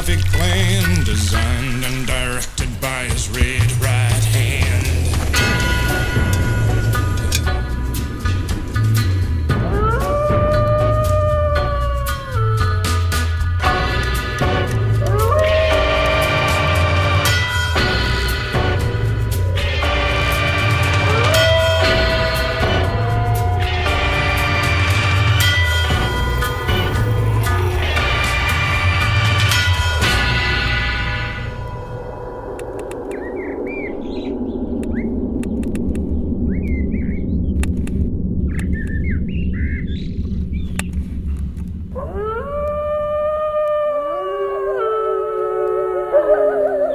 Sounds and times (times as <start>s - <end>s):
Bird vocalization, bird call, bird song: 33.1s - 37.6s, 38.4s - 41.1s.